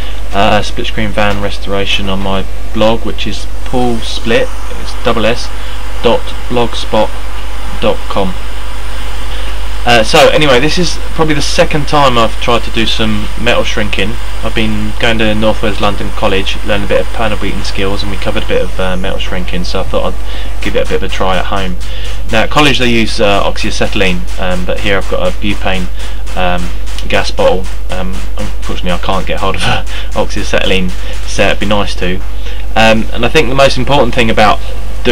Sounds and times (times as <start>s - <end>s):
Speech: 0.3s - 7.2s, 7.8s - 8.4s, 9.8s - 35.1s.